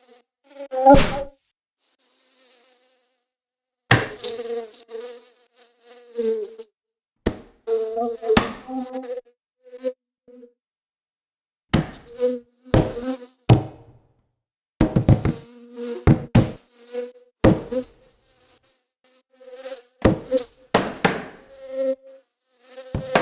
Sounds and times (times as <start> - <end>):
Mosquito: 0.0 - 3.4, 4.1 - 6.8, 7.6 - 10.6, 15.2 - 20.6, 21.4 - 23.2
Fly, housefly: 0.0 - 6.8, 7.5 - 10.6, 11.9 - 13.8, 15.0 - 23.2.